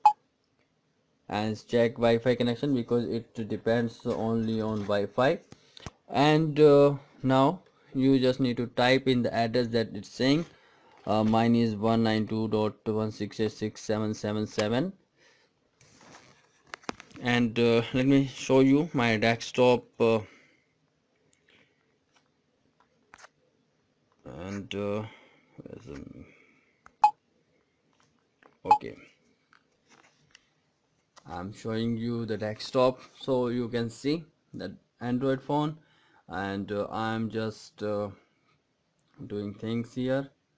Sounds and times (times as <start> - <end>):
Inside, small room: 0.0 - 40.5
Speech: 1.3 - 5.4, 6.1 - 10.5, 11.1 - 15.0, 17.2 - 20.3, 24.2 - 26.3, 28.7 - 29.1, 31.2 - 38.2, 39.2 - 40.4.